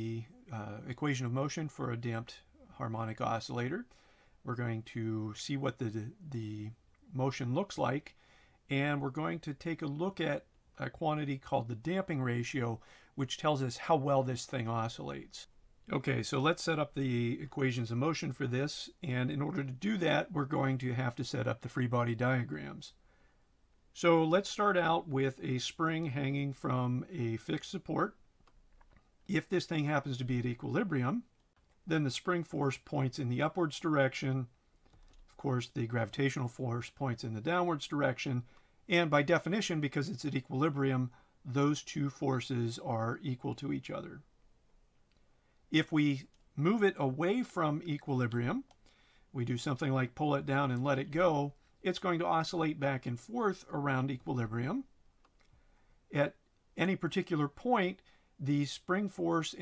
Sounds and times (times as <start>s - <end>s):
Speech: 0.0s - 23.0s, 24.0s - 28.2s, 29.3s - 31.3s, 31.9s - 34.6s, 35.3s - 44.3s, 45.7s - 54.9s, 56.1s - 59.6s.